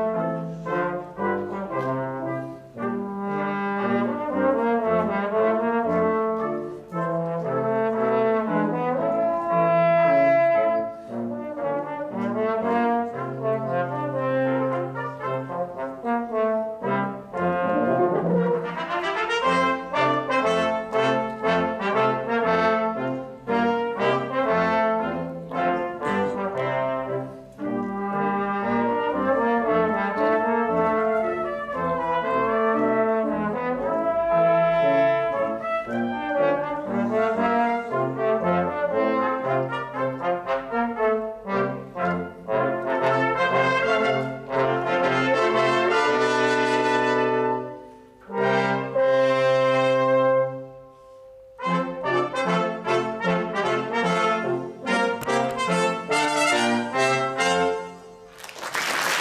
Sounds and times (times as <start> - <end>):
Trombone: 0.0 - 50.9, 51.5 - 59.2
Trumpet: 0.0 - 59.2.